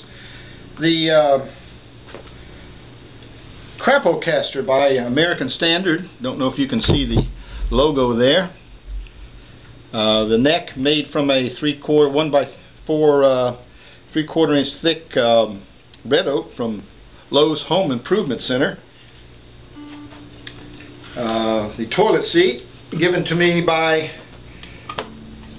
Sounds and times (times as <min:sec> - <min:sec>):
Speech: 0:00.8 - 0:01.6, 0:03.8 - 0:08.6, 0:09.9 - 0:18.9, 0:21.2 - 0:24.3.